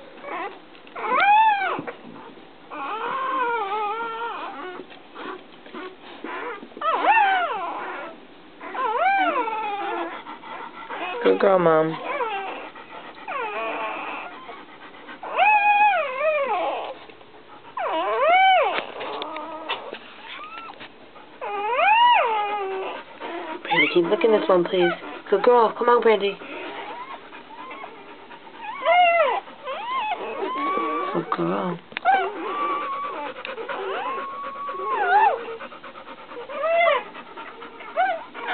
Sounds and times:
Whimper (dog): 0.0s - 17.1s, 17.7s - 38.5s.

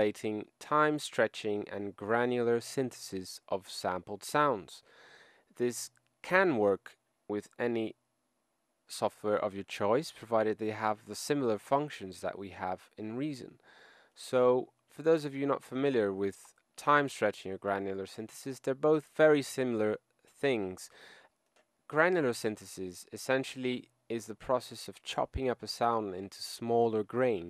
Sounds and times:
Narration, monologue: 0.0s - 27.5s.

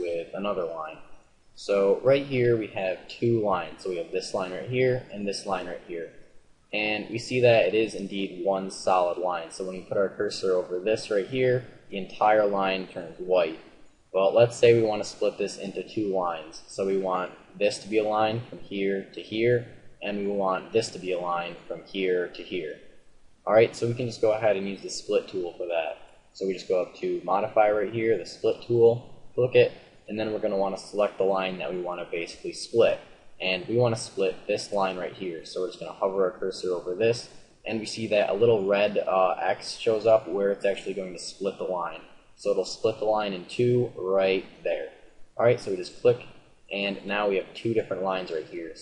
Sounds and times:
Speech: 0.0s - 1.0s, 1.6s - 6.2s, 6.8s - 13.6s, 14.2s - 22.8s, 23.5s - 48.8s.

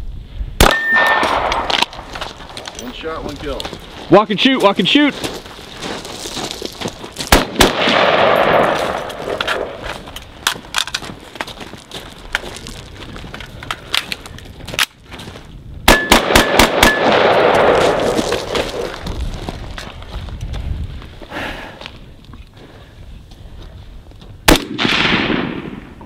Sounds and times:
Machine gun: 15.9s - 18.2s.

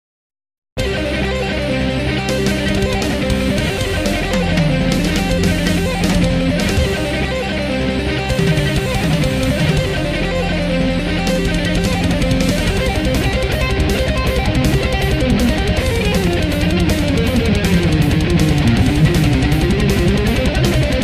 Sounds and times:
Heavy metal: 0.8s - 21.0s.

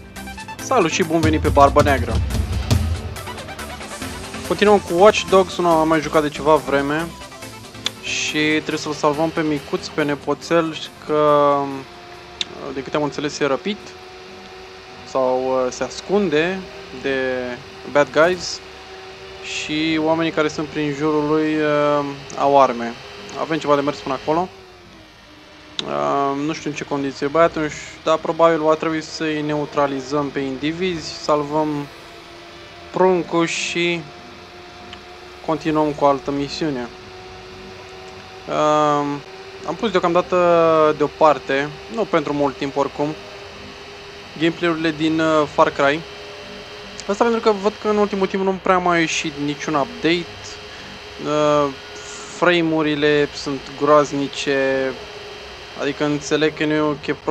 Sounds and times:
Speech: 0.6s - 2.3s, 4.5s - 7.1s, 8.0s - 14.0s, 15.1s - 18.6s, 19.4s - 24.5s, 25.8s - 31.9s, 32.9s - 34.1s, 35.5s - 37.0s, 38.5s - 43.2s, 44.4s - 46.1s, 47.0s - 55.0s, 55.8s - 57.3s.

